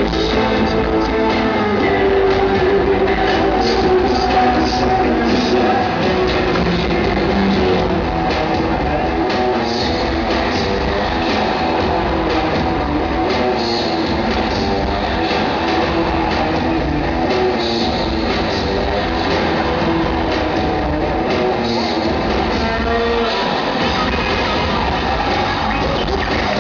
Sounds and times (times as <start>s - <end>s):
Inside, large room or hall: 0.0s - 26.6s
Music: 0.0s - 26.6s.